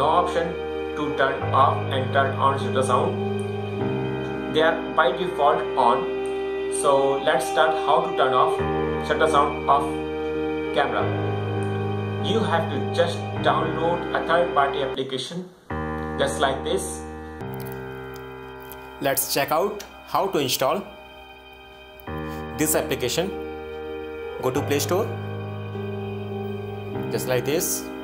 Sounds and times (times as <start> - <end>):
Speech: 0.0 - 3.2, 4.5 - 6.1, 6.7 - 10.0, 12.2 - 15.6, 16.2 - 17.0, 19.0 - 20.9, 22.5 - 23.4, 24.4 - 25.2, 27.1 - 27.9
Music: 0.0 - 28.0.